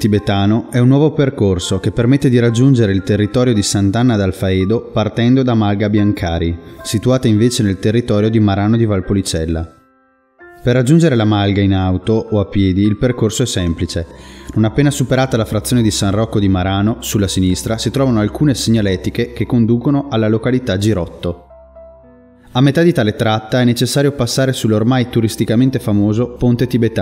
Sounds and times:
Speech: 0:00.0 - 0:09.8, 0:10.6 - 0:21.4, 0:22.6 - 0:27.0
Music: 0:00.0 - 0:27.0.

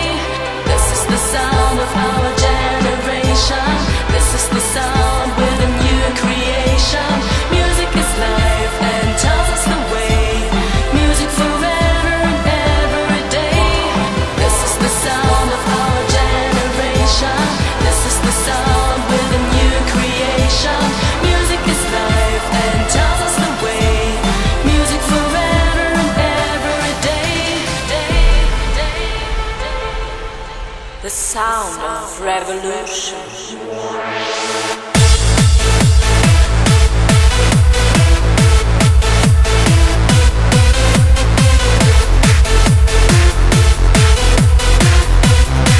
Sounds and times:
Music: 0:00.0 - 0:45.7.

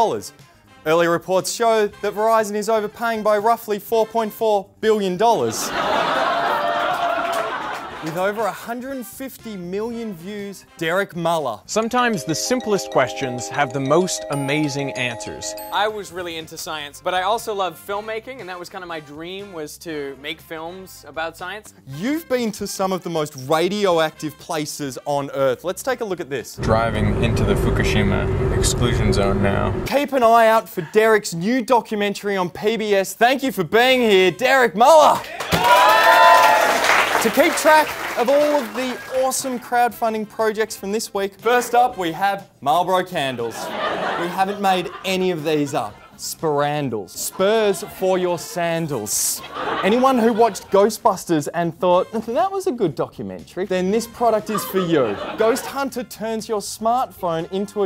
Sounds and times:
Speech: 0:00.0 - 0:05.7, 0:08.0 - 0:35.3, 0:37.2 - 0:57.8
Music: 0:00.0 - 0:57.8.

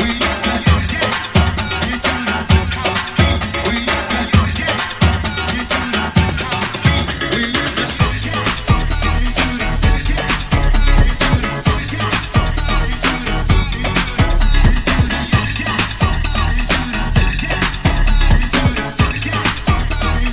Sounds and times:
Disco: 0:00.0 - 0:20.3
House music: 0:00.0 - 0:20.3
Synthesizer: 0:00.0 - 0:20.3.

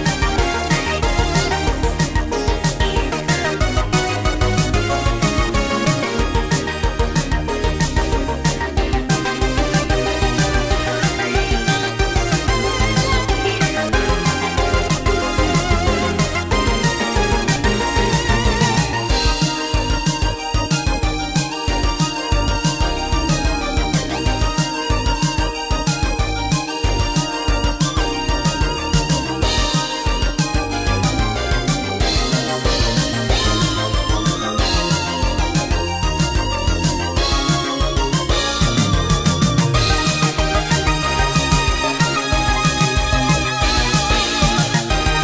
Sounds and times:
Video game music: 0:00.0 - 0:45.2.

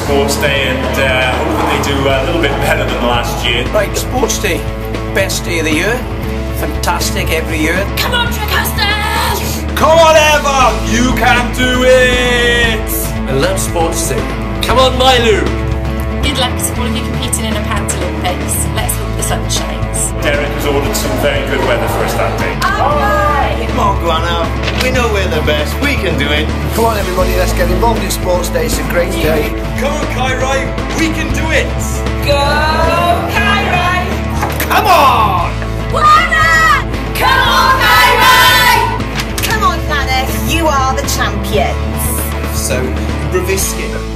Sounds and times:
Music: 0:00.0 - 0:44.1.

